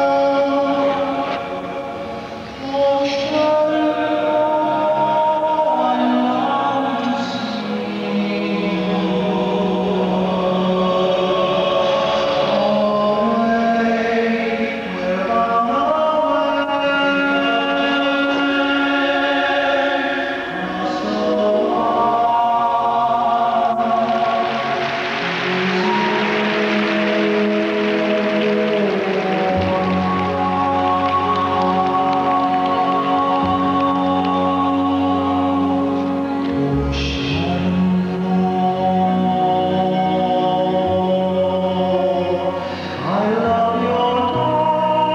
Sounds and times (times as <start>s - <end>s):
Music: 0.0s - 45.1s.